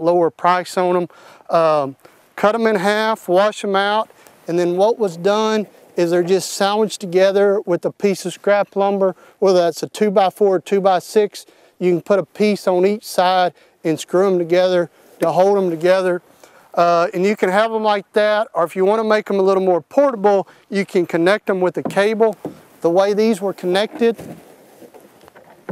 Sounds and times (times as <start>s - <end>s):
Speech: 0.0s - 16.2s, 16.8s - 24.2s.